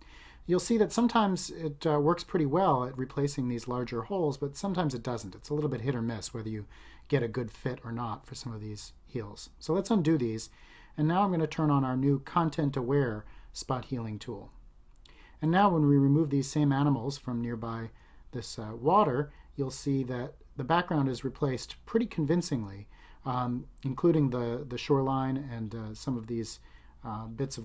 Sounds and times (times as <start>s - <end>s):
Speech: 0.5s - 14.6s, 15.4s - 27.6s.